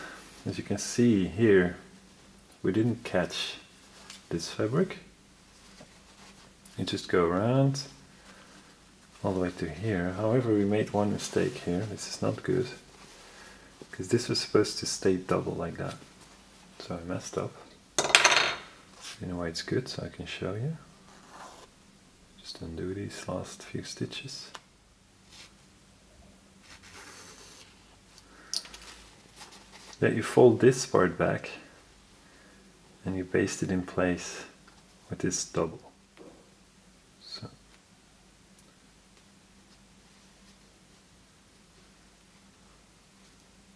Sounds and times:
Speech: 0:00.4 - 0:01.9, 0:02.6 - 0:03.7, 0:04.3 - 0:05.1, 0:06.7 - 0:08.0, 0:09.2 - 0:12.9, 0:13.9 - 0:16.0, 0:16.8 - 0:17.8, 0:19.1 - 0:20.9, 0:22.4 - 0:24.6, 0:30.0 - 0:31.8, 0:33.0 - 0:36.0, 0:37.2 - 0:37.6.

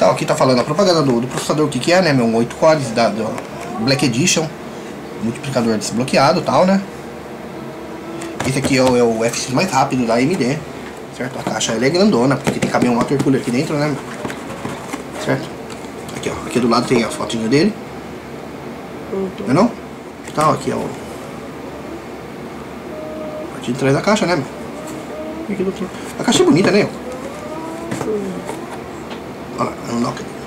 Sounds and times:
Speech: 0:00.0 - 0:04.6.

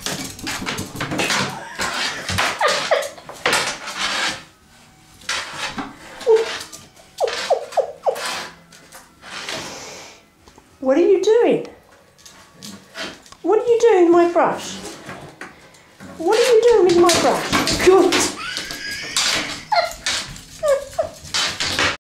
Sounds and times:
Speech: 0:13.4 - 0:14.8, 0:16.2 - 0:18.4.

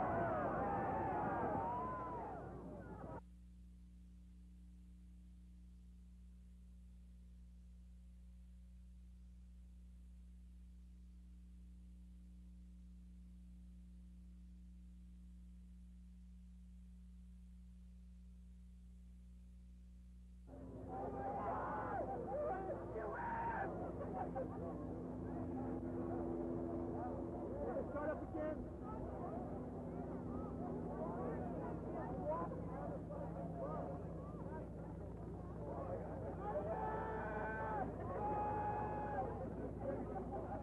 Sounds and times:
Speech: 0:20.5 - 0:40.6.

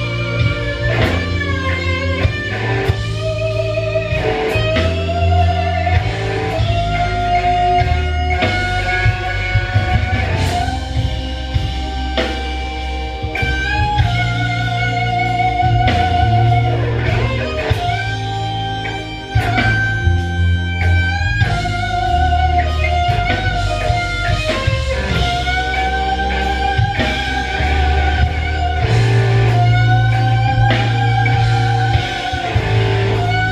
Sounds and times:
Blues: 0:00.0 - 0:33.5
Guitar: 0:00.0 - 0:33.5.

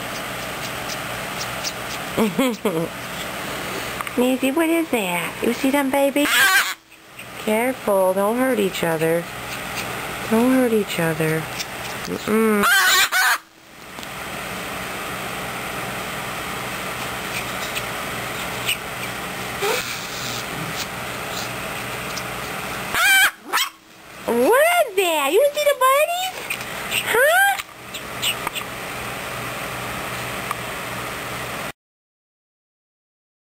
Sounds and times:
Animal: 0:00.0 - 0:02.1, 0:06.2 - 0:07.4, 0:17.3 - 0:21.5
Speech: 0:04.2 - 0:06.6, 0:07.4 - 0:09.3, 0:10.3 - 0:11.5, 0:12.1 - 0:12.7, 0:24.3 - 0:26.3, 0:27.1 - 0:27.6.

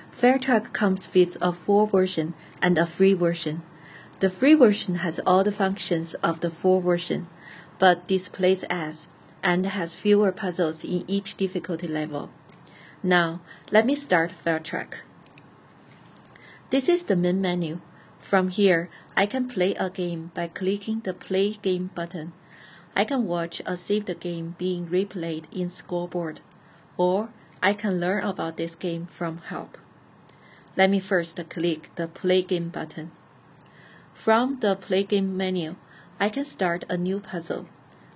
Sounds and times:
Speech: 0:00.1 - 0:12.4, 0:13.0 - 0:15.1, 0:16.7 - 0:22.4, 0:23.0 - 0:29.9, 0:30.8 - 0:33.2, 0:34.2 - 0:37.7.

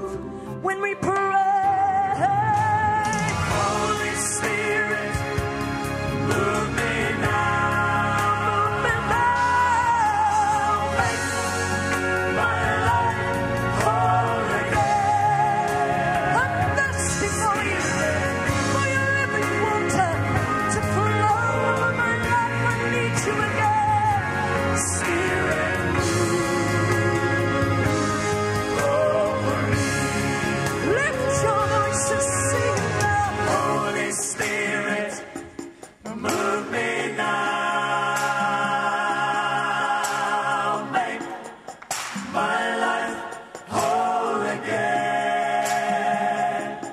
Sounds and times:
Christmas music: 0:00.0 - 0:46.9
Singing: 0:06.2 - 0:46.9.

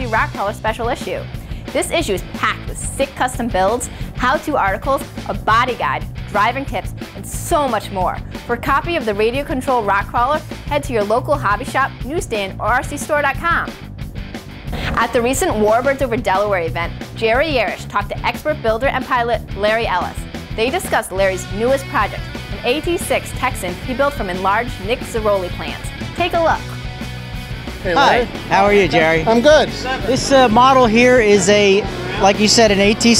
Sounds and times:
Speech: 0:00.0 - 0:01.2, 0:01.8 - 0:13.7, 0:15.0 - 0:26.6, 0:27.9 - 0:33.2
Music: 0:00.0 - 0:33.2.

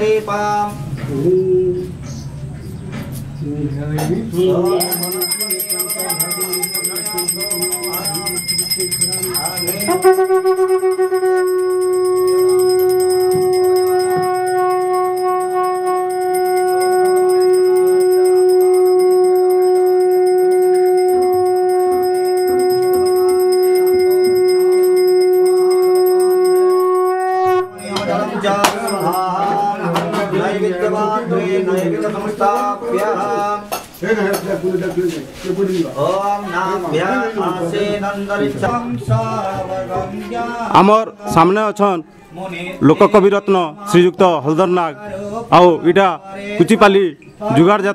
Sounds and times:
Outside, urban or manmade: 0:00.0 - 0:30.8
Bell: 0:04.5 - 0:30.0.

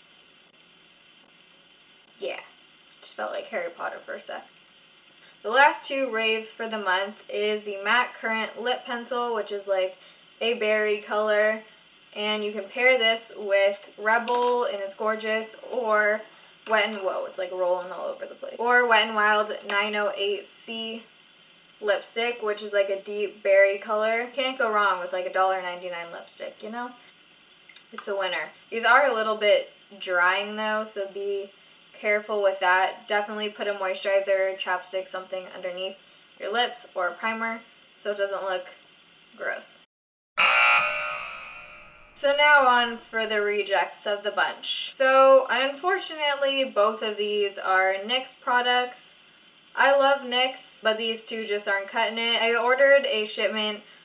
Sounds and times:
Speech: 0:02.2 - 0:04.5, 0:05.4 - 0:21.1, 0:21.8 - 0:27.0, 0:27.8 - 0:38.8, 0:39.4 - 0:39.9, 0:42.2 - 0:49.2, 0:49.8 - 0:53.9.

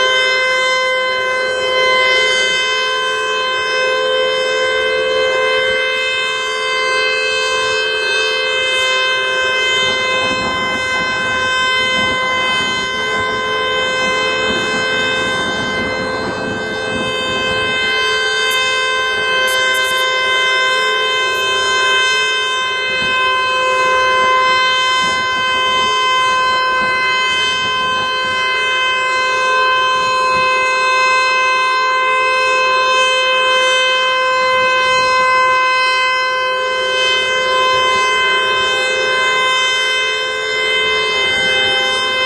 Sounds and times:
Civil defense siren: 0:00.0 - 0:42.2.

